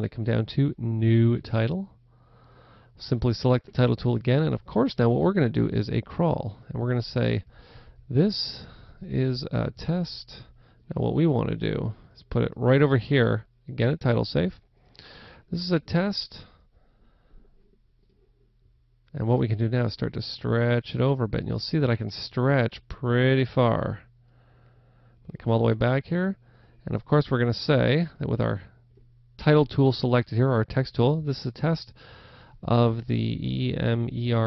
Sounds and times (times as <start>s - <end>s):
Speech: 0.0s - 2.0s, 3.0s - 7.5s, 8.1s - 14.6s, 15.5s - 16.6s, 19.1s - 24.1s, 25.3s - 28.8s, 29.4s - 32.0s, 32.6s - 34.4s.